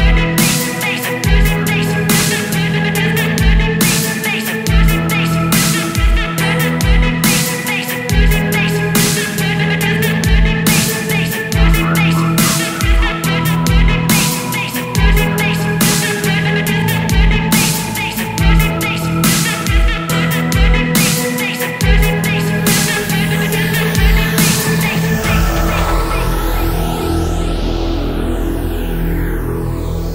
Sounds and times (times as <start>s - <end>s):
Dubstep: 0.0s - 30.1s.